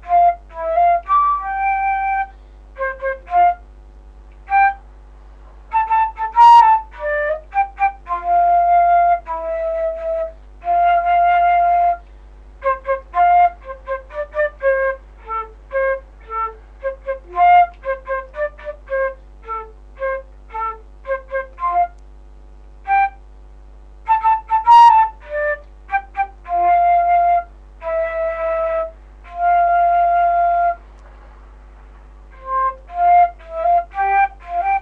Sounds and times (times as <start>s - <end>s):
Music: 0.0s - 4.9s, 5.6s - 22.0s, 22.8s - 23.2s, 24.0s - 31.0s, 32.3s - 34.8s.